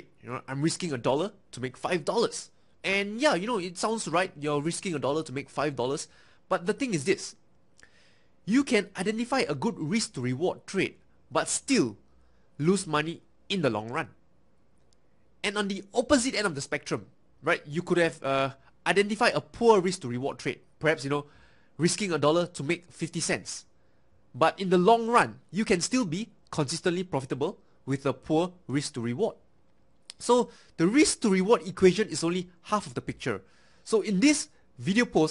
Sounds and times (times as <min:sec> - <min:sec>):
Speech: 0:00.0 - 0:07.4, 0:08.5 - 0:12.0, 0:12.6 - 0:14.2, 0:15.4 - 0:23.7, 0:24.4 - 0:29.4, 0:30.1 - 0:35.3.